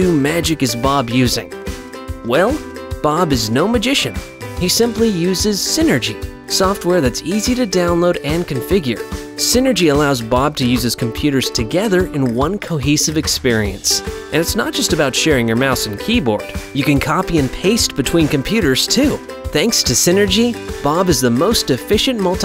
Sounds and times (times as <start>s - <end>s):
Speech: 0.0s - 1.5s, 2.2s - 22.4s
Music: 0.0s - 22.4s.